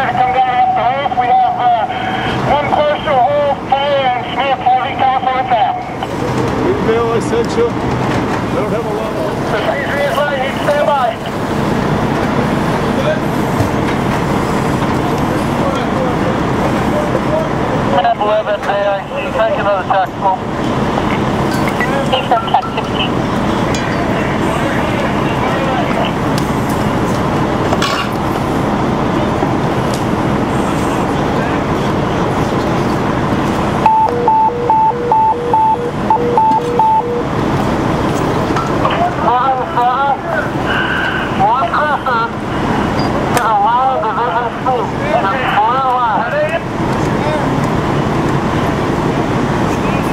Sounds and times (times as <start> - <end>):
Speech: 0.0 - 6.0, 8.5 - 11.4, 12.9 - 13.4, 14.9 - 20.5, 23.8 - 26.2, 38.9 - 40.7, 41.3 - 42.4, 43.2 - 47.6.